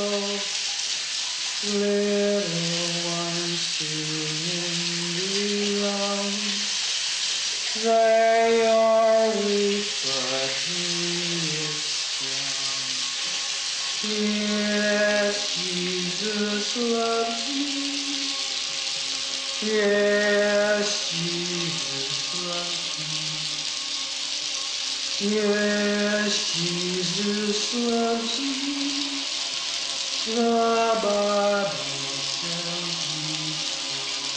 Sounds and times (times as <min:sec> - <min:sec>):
Male singing: 0:00.0 - 0:00.6, 0:01.6 - 0:06.8, 0:07.6 - 0:13.4, 0:14.0 - 0:18.6, 0:19.5 - 0:23.9, 0:25.1 - 0:34.3
Music: 0:00.0 - 0:34.3.